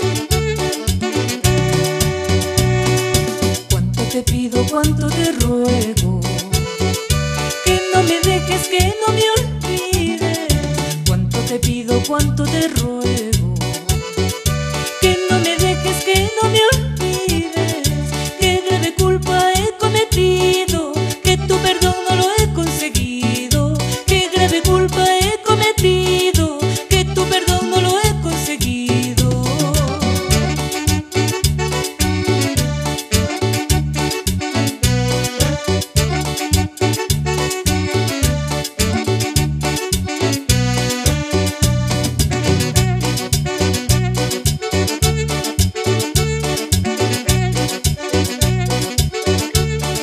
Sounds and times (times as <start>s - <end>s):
Music: 0.0s - 50.0s.